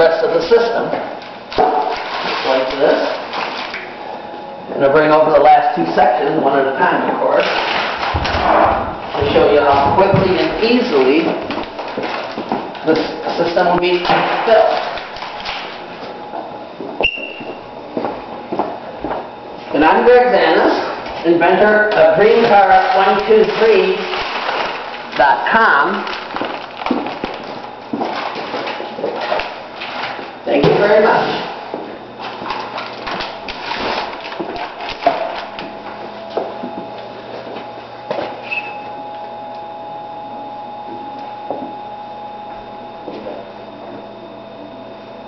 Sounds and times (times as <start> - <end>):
Speech: 0.0 - 1.2, 2.4 - 3.2, 4.7 - 7.5, 8.4 - 11.4, 12.8 - 15.0, 19.7 - 24.2, 25.2 - 26.1, 30.4 - 31.6.